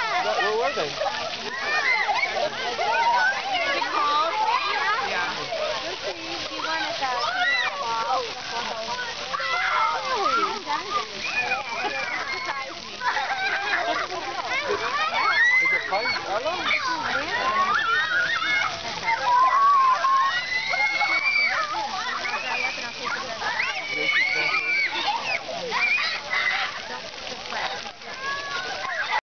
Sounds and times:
Speech: 0.0 - 29.2
Water: 0.0 - 29.2.

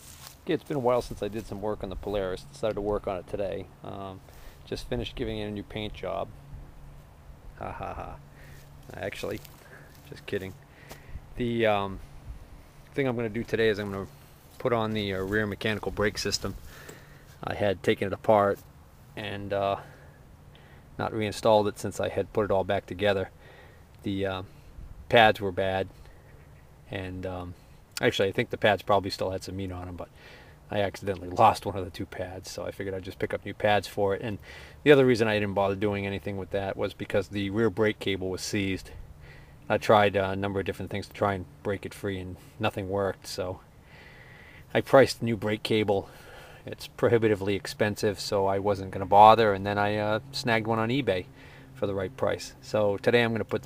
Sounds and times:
Speech: 0.4 - 6.3, 7.6 - 8.2, 8.9 - 10.6, 11.4 - 12.0, 12.9 - 16.6, 17.4 - 18.6, 19.2 - 20.0, 21.0 - 23.3, 24.0 - 24.5, 25.1 - 25.9, 26.9 - 30.1, 30.7 - 39.0, 39.7 - 43.6, 44.7 - 53.6.

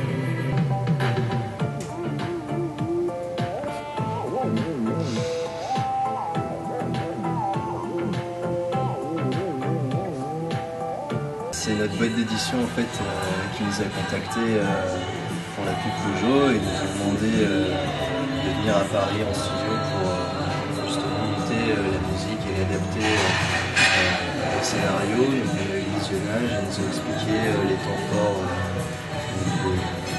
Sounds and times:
Music: 0.0 - 30.1
Speech: 11.6 - 15.0, 15.6 - 17.8, 18.4 - 28.7.

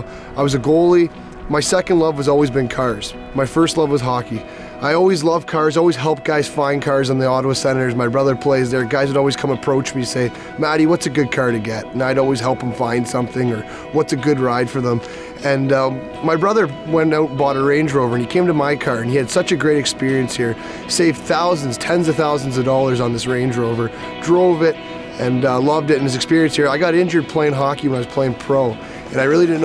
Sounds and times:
Music: 0.0 - 29.6
Speech: 0.0 - 29.6.

